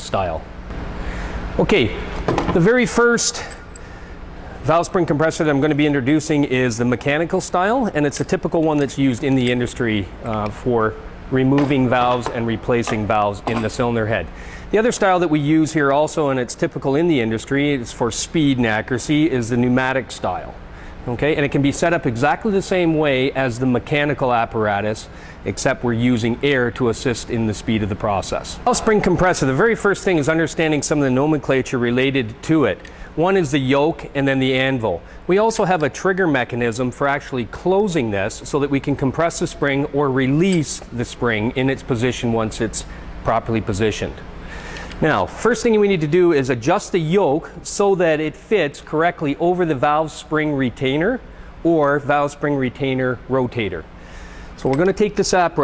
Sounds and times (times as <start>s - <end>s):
Speech: 0.0s - 0.5s, 1.6s - 3.6s, 4.6s - 44.2s, 45.0s - 53.9s, 54.6s - 55.6s.